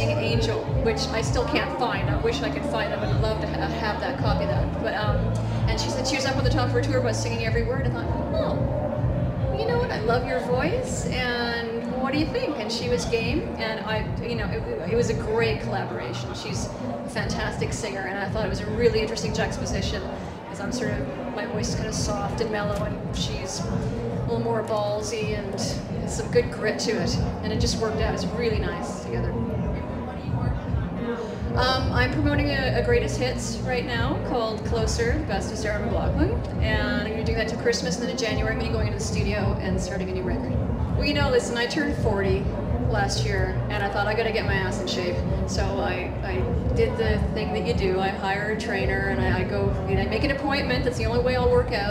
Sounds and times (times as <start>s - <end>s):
Speech: 0.0s - 8.7s, 9.4s - 51.9s
Music: 0.0s - 51.9s.